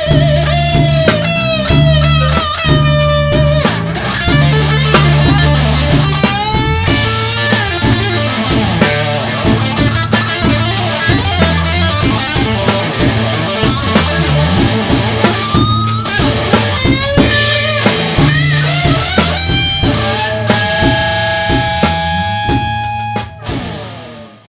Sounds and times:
Strum: 0.0 - 24.4
Electric guitar: 0.0 - 24.5.

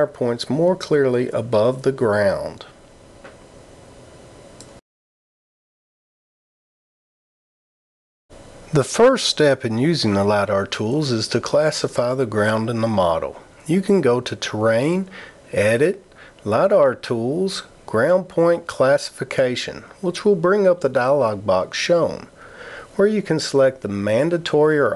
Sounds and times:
Speech: 0.0 - 2.8, 8.7 - 22.4, 23.0 - 24.9.

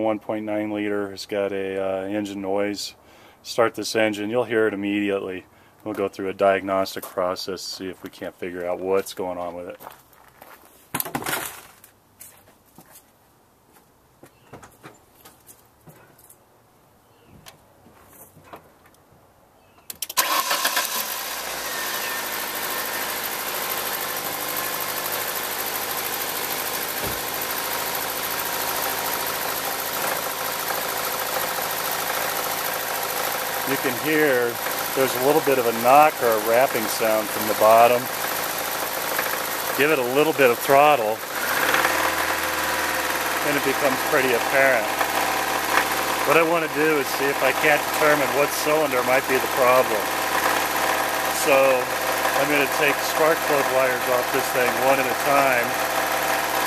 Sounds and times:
Speech: 0.0 - 9.8, 33.6 - 38.1, 39.8 - 41.2, 43.4 - 44.9, 46.3 - 50.1, 51.4 - 55.8
Idling: 20.2 - 56.6
Engine knocking: 22.2 - 56.6.

